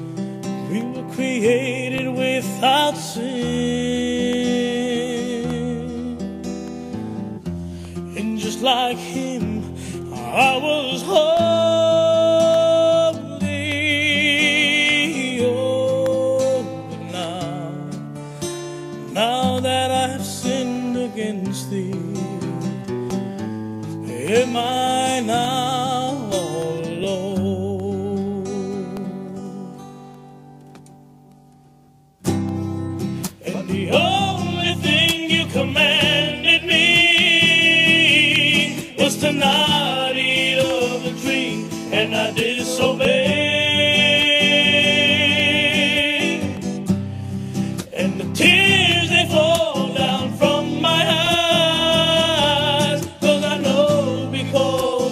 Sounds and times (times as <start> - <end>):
Gospel music: 0.0 - 55.1.